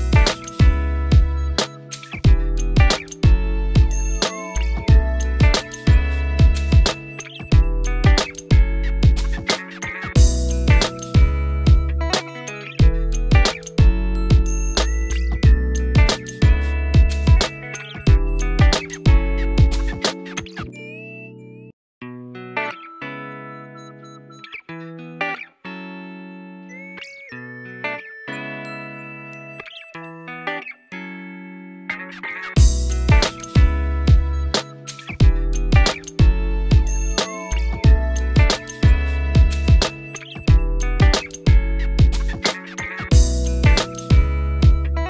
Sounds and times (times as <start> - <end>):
Music: 0.0 - 45.1.